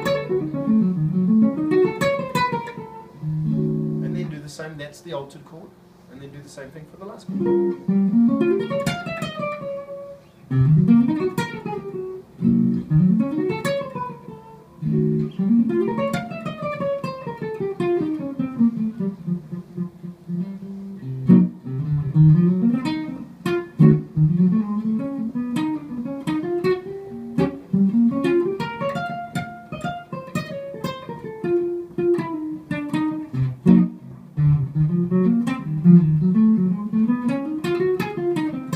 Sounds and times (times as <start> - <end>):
Guitar: 0.0 - 38.7
Inside, small room: 0.0 - 38.7.